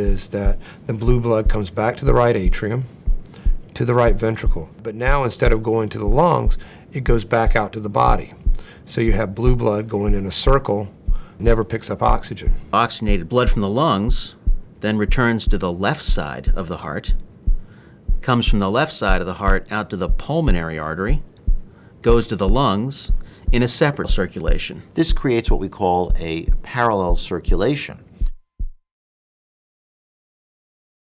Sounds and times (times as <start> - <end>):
Speech: 0.0 - 2.9, 3.8 - 17.2, 18.2 - 21.3, 22.0 - 28.1.